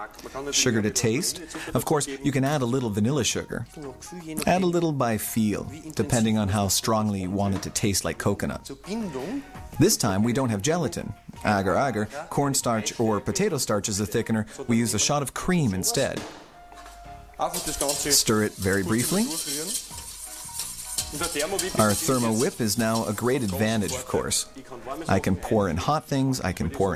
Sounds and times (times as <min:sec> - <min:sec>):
Speech: 0:00.0 - 0:16.2, 0:17.4 - 0:19.8, 0:21.2 - 0:26.9
Music: 0:00.0 - 0:26.9.